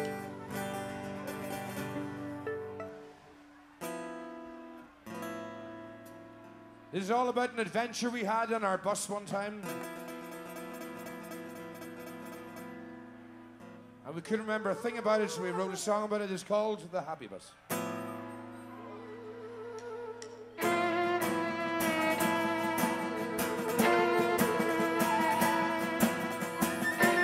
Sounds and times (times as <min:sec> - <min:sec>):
Music: 0:00.0 - 0:07.1, 0:09.6 - 0:14.6, 0:17.6 - 0:27.2
Speech: 0:14.1 - 0:17.6.